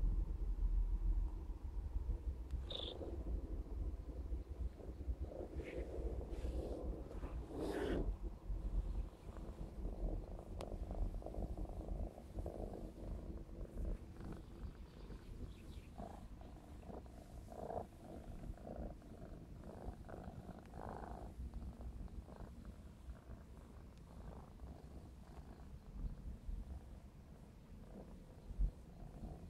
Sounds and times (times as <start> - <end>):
Purr: 0.0 - 29.5.